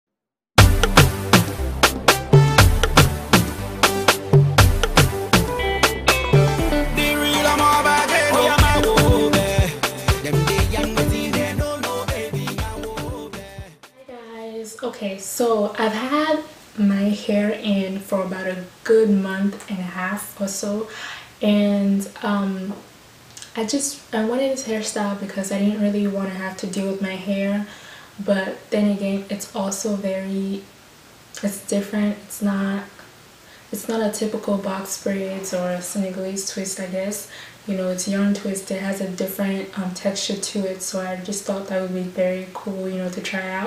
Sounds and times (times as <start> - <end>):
Afrobeat: 0.6 - 13.9.